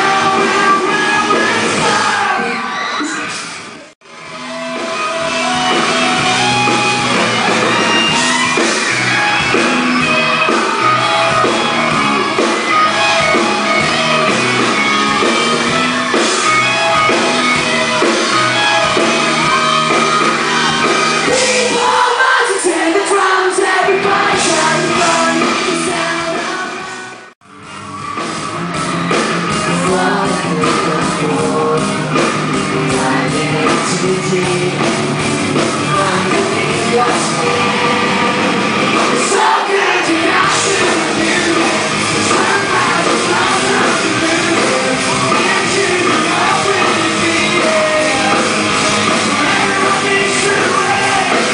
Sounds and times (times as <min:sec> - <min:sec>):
Singing: 0:00.0 - 0:03.2, 0:18.7 - 0:27.2, 0:29.6 - 0:38.0, 0:39.0 - 0:51.5
Music: 0:00.0 - 0:51.5.